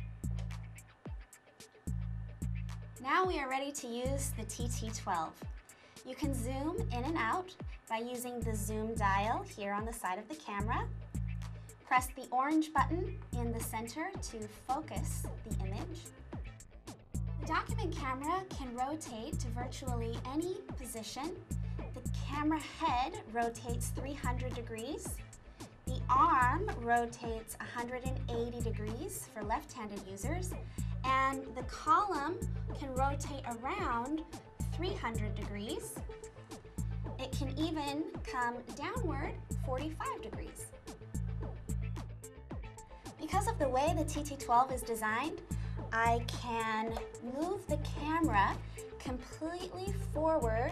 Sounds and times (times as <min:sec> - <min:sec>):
Music: 0:00.0 - 0:50.7
Speech: 0:03.0 - 0:05.4, 0:06.1 - 0:10.9, 0:11.9 - 0:16.1, 0:17.4 - 0:21.4, 0:22.0 - 0:25.2, 0:25.9 - 0:36.0, 0:37.2 - 0:40.7, 0:43.2 - 0:50.7.